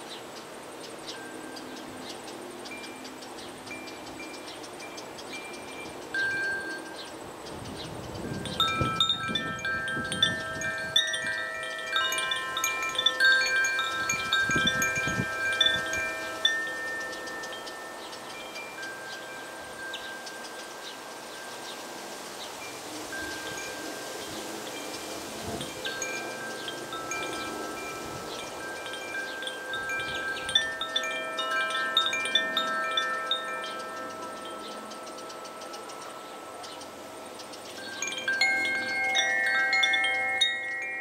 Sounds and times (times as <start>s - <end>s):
Wind chime: 0.0s - 41.0s.